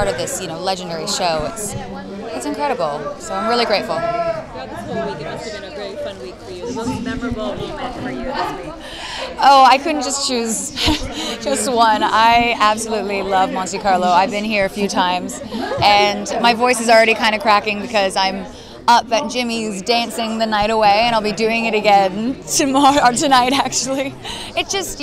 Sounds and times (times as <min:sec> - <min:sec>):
Speech: 0:00.0 - 0:25.0.